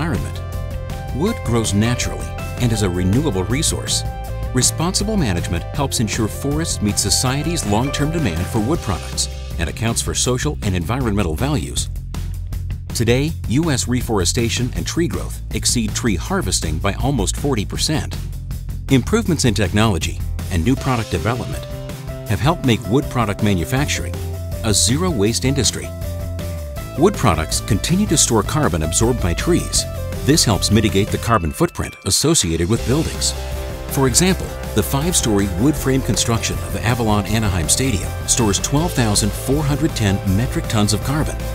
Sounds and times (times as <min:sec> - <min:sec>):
Speech: 0:00.0 - 0:00.4, 0:01.1 - 0:11.9, 0:13.0 - 0:18.2, 0:18.9 - 0:21.7, 0:22.3 - 0:25.9, 0:27.0 - 0:41.4
Music: 0:00.0 - 0:41.5.